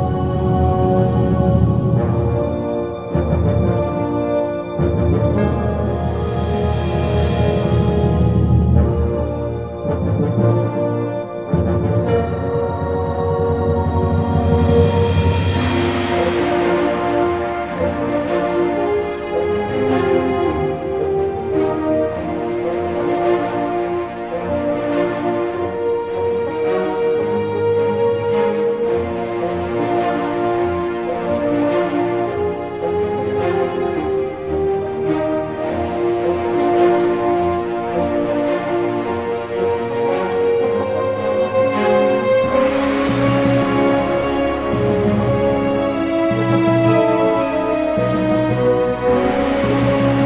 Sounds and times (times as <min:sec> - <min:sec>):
New-age music: 0:00.0 - 0:50.2.